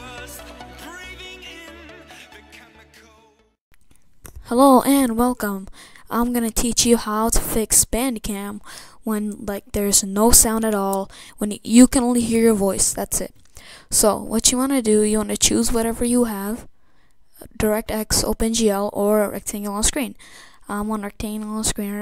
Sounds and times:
Speech: 4.4s - 13.3s, 13.9s - 16.7s, 17.4s - 22.0s.

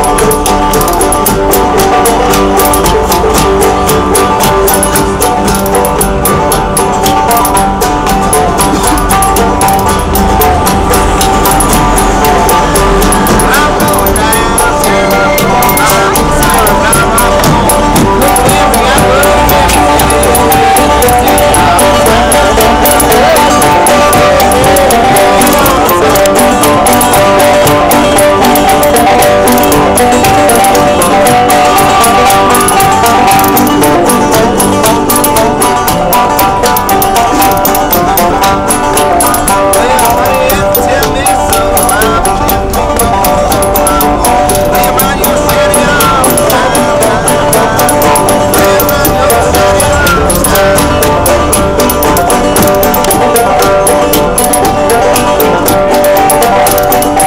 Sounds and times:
Music: 0.0s - 57.2s.

